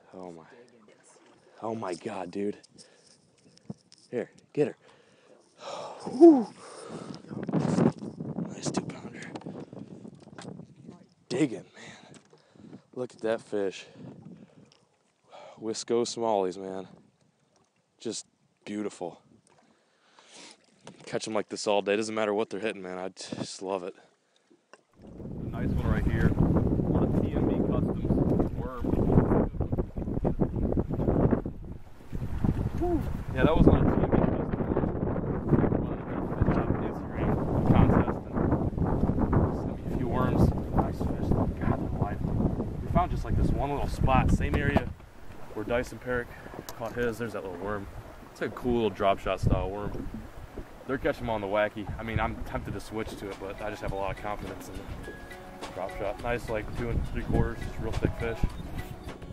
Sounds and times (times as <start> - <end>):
Sailboat, sailing ship: 0.0 - 15.4, 23.2 - 59.3.